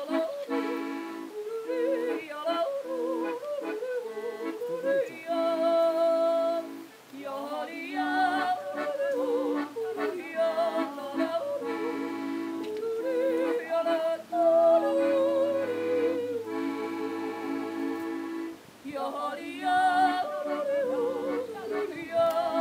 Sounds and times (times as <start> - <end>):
Music: 0.0 - 6.9, 8.3 - 14.0, 14.6 - 18.6, 19.4 - 22.6
Yodeling: 0.0 - 22.6.